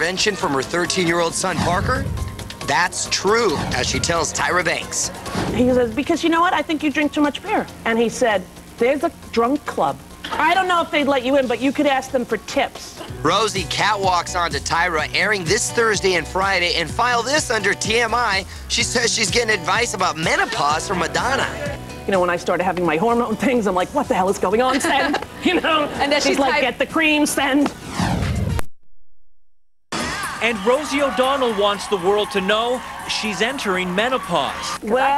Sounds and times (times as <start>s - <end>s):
Music: 0.0s - 28.6s, 29.9s - 35.1s.